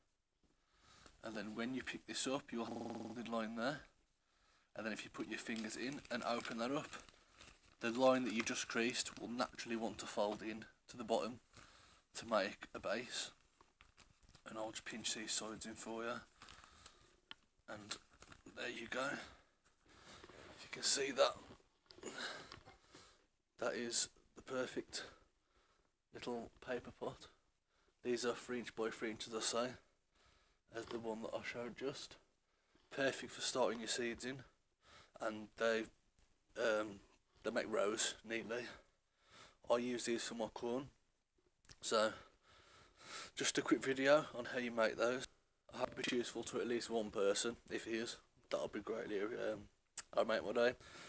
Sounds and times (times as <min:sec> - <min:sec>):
Inside, small room: 0:00.0 - 0:51.0
Speech: 0:01.2 - 0:03.9, 0:04.8 - 0:07.0, 0:07.8 - 0:11.4, 0:12.2 - 0:13.4, 0:14.4 - 0:16.3, 0:17.7 - 0:19.4, 0:20.6 - 0:21.5, 0:23.6 - 0:25.2, 0:26.2 - 0:27.4, 0:28.0 - 0:29.8, 0:30.7 - 0:32.2, 0:32.9 - 0:34.5, 0:35.2 - 0:36.0, 0:36.6 - 0:38.9, 0:39.7 - 0:40.9, 0:41.8 - 0:42.3, 0:43.4 - 0:50.8.